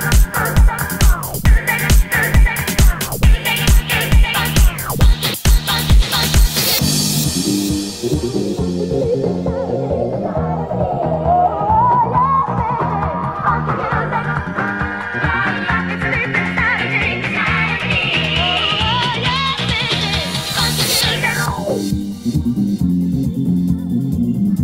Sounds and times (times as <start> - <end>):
Background music: 0.0 - 24.6.